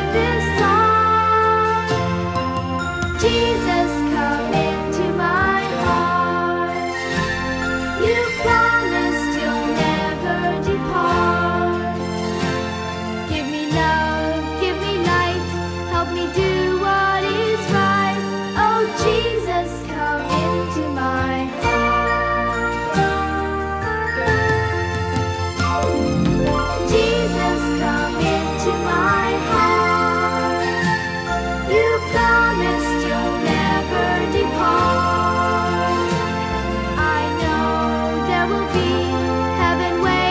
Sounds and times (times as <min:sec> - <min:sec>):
Christmas music: 0:00.0 - 0:40.3
Music for children: 0:00.0 - 0:40.3.